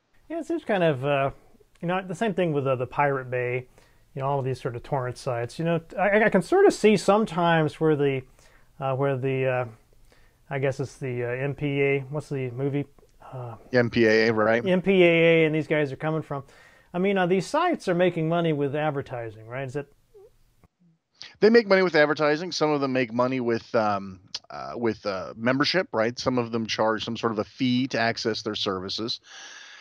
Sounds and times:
Speech: 0.3s - 9.8s, 10.5s - 19.9s, 21.2s - 29.3s.

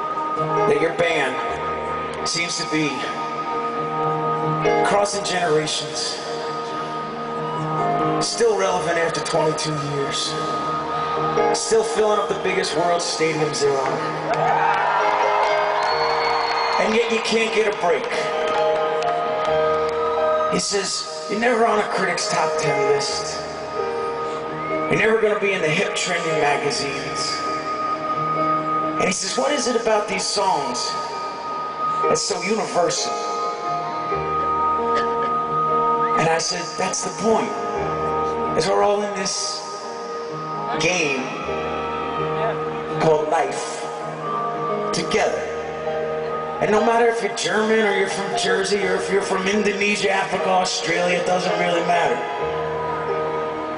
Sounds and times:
Music: 0.0s - 53.7s
Speech: 0.7s - 1.5s, 2.2s - 3.2s, 4.8s - 6.3s, 8.2s - 10.6s, 11.6s - 14.0s, 16.8s - 18.4s, 20.5s - 23.4s, 24.9s - 27.4s, 29.0s - 31.0s, 32.1s - 33.3s, 36.2s - 37.6s, 38.6s - 39.8s, 40.8s - 41.4s, 42.4s - 43.9s, 44.9s - 45.5s, 46.6s - 52.3s.

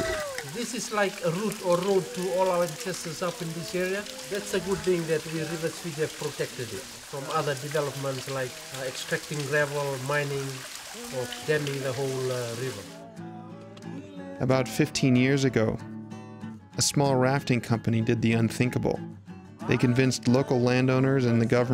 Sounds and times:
Speech: 0.0s - 12.8s, 14.4s - 15.8s, 16.8s - 19.0s, 19.6s - 21.7s
Music: 0.0s - 21.7s.

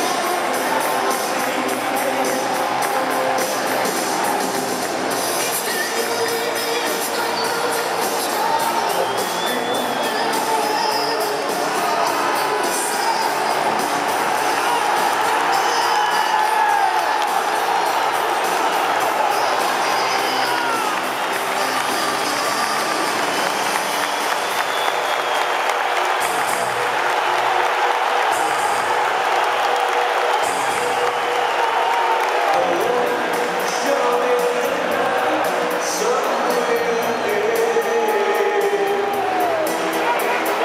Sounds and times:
Music: 0.0s - 40.6s.

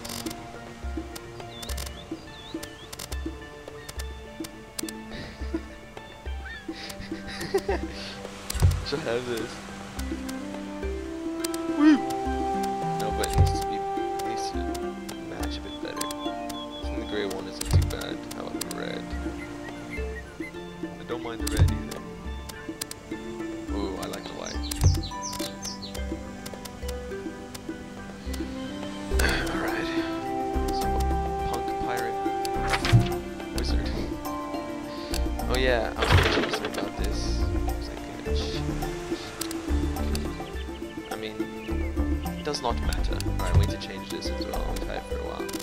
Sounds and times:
Music: 0.0s - 45.6s
Speech: 8.8s - 9.6s, 13.0s - 16.0s, 17.0s - 19.0s, 21.0s - 22.0s, 23.7s - 24.6s, 30.7s - 32.2s, 33.6s - 34.1s, 35.4s - 39.3s, 41.2s - 41.5s, 42.4s - 45.6s.

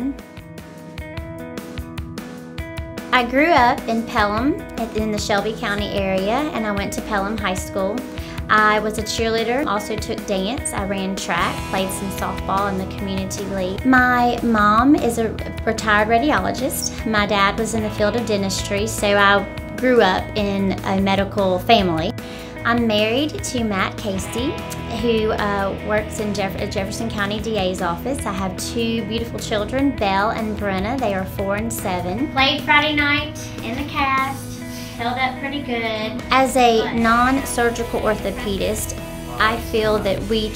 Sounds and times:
Music: 0.0s - 40.5s.

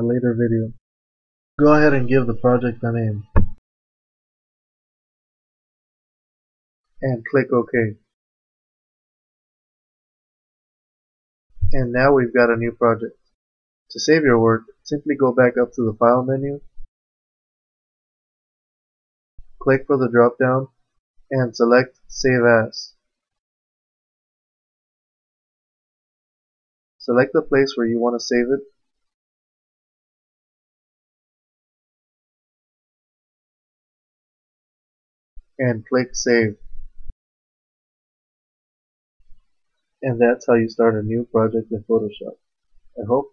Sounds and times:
Speech: 0.0s - 0.8s, 1.6s - 3.5s, 7.0s - 8.1s, 11.7s - 13.1s, 13.9s - 16.7s, 19.6s - 20.7s, 21.3s - 23.0s, 27.0s - 28.7s, 35.6s - 36.6s, 40.0s - 42.4s, 43.0s - 43.3s.

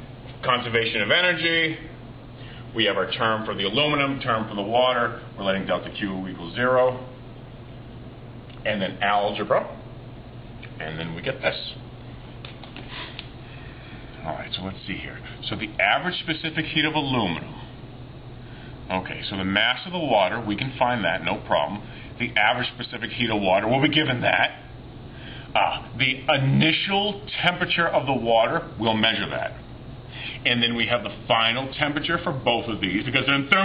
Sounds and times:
Speech: 0.4s - 2.0s, 2.8s - 7.2s, 8.6s - 9.8s, 10.8s - 11.8s, 14.2s - 17.7s, 18.9s - 24.7s, 25.6s - 29.6s, 30.4s - 33.6s.

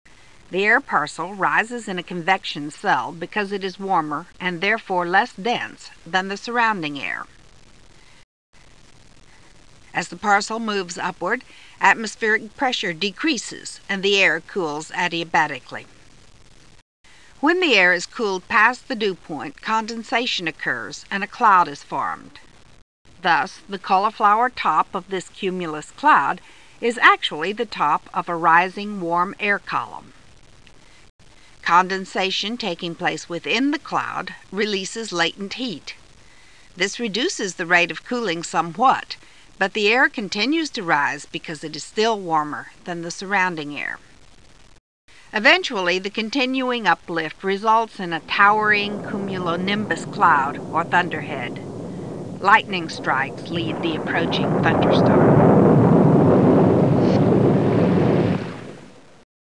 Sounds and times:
Speech: 0.5s - 7.3s, 10.0s - 15.9s, 17.4s - 22.4s, 23.2s - 30.1s, 31.6s - 36.0s, 36.8s - 44.0s, 45.3s - 51.6s, 52.4s - 55.2s.

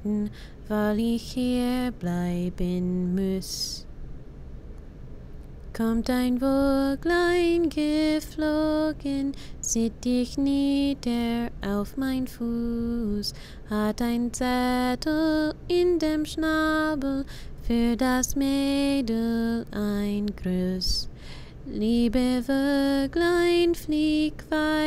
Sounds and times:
Lullaby: 0.0s - 3.9s, 5.7s - 24.8s.

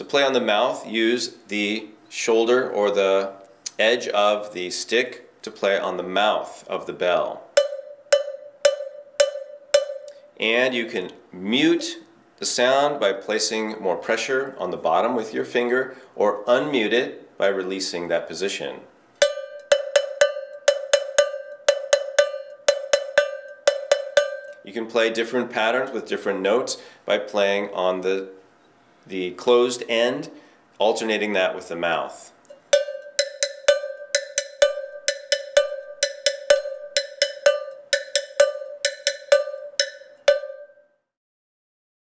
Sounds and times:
Cowbell: 7.6s - 10.2s, 19.2s - 24.6s, 32.5s - 40.9s.

